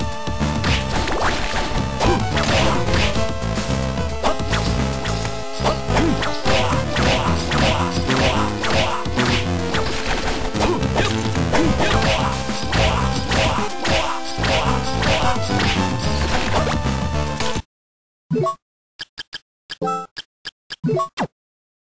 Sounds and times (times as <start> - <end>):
Music: 0.0 - 17.7.